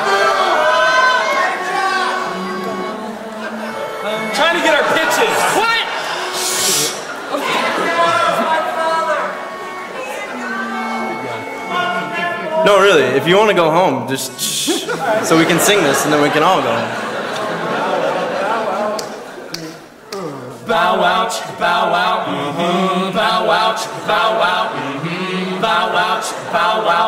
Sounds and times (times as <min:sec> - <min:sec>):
Male speech, man speaking: 0:04.3 - 0:05.9, 0:07.4 - 0:09.3, 0:10.9 - 0:17.0.